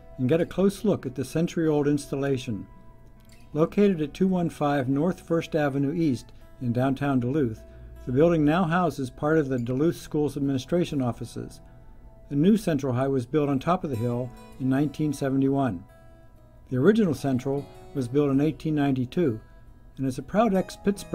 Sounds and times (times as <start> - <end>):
Speech: 0.2 - 2.7, 3.6 - 11.6, 12.3 - 15.8, 16.7 - 19.4, 20.0 - 21.1.